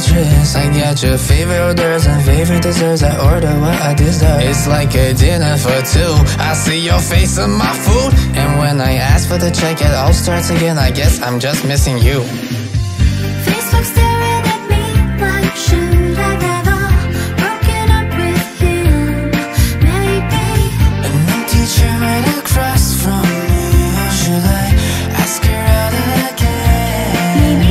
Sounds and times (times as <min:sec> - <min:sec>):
Music: 0:00.0 - 0:27.7
Male speech, man speaking: 0:02.6 - 0:12.4.